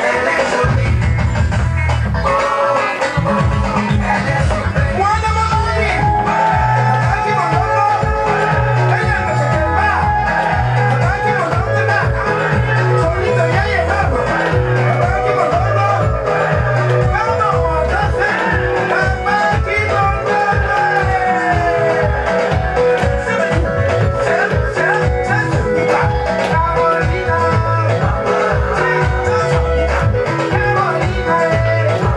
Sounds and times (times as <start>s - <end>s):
Music of Africa: 0.0s - 32.1s.